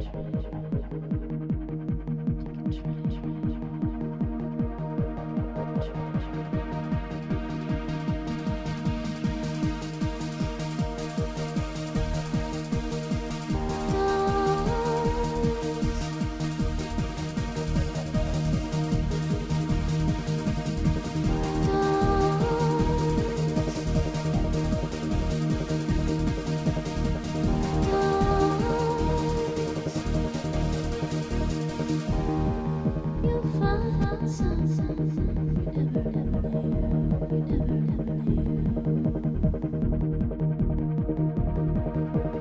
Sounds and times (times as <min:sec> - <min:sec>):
Exciting music: 0:00.0 - 0:42.4.